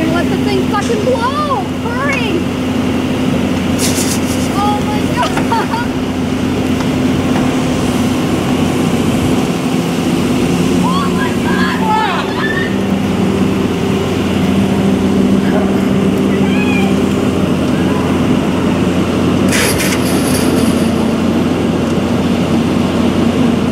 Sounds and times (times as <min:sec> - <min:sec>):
Fire: 0:00.0 - 0:23.7
Outside, urban or manmade: 0:00.0 - 0:23.7
Truck: 0:00.0 - 0:23.7.